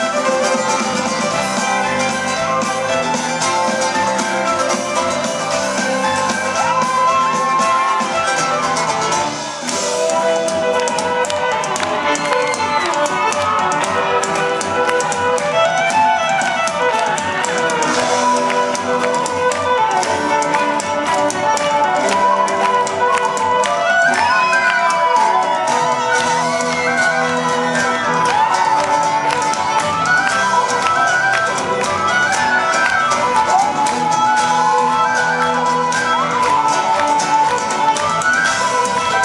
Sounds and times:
Violin, fiddle: 0:00.0 - 0:39.2.

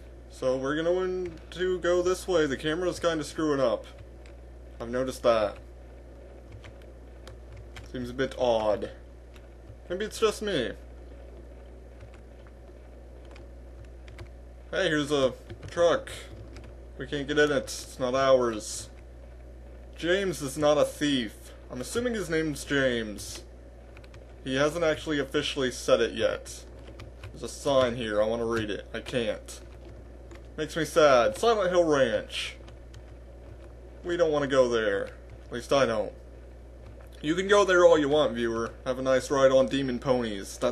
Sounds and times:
Speech: 0:00.3 - 0:04.0, 0:04.8 - 0:05.6, 0:07.9 - 0:09.0, 0:09.9 - 0:10.8, 0:14.7 - 0:16.3, 0:17.0 - 0:19.0, 0:20.0 - 0:23.5, 0:24.4 - 0:26.7, 0:27.4 - 0:29.7, 0:30.6 - 0:32.6, 0:34.0 - 0:36.2, 0:37.2 - 0:40.7.

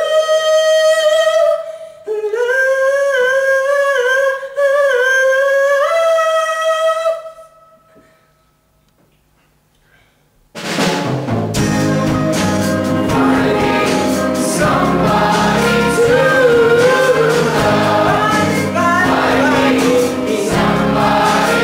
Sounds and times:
Inside, large room or hall: 0:00.0 - 0:21.6
Music: 0:10.6 - 0:21.6.

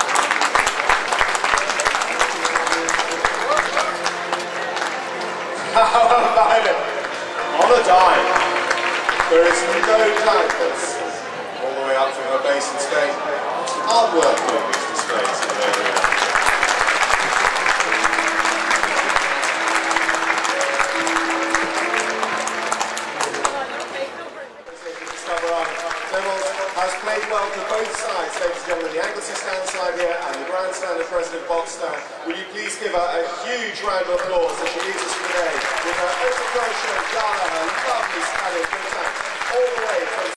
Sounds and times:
Speech: 0:05.6 - 0:08.4, 0:09.2 - 0:16.0, 0:23.2 - 0:40.3.

